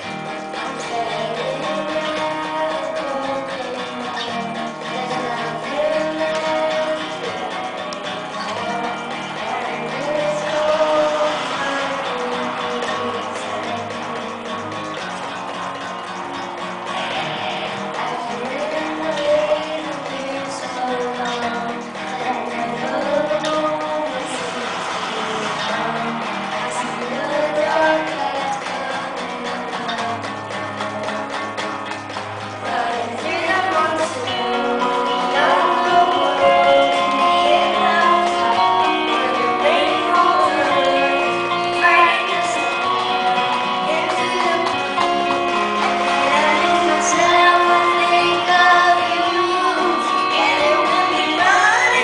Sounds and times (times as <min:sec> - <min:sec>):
Electric guitar: 0:00.0 - 0:52.0.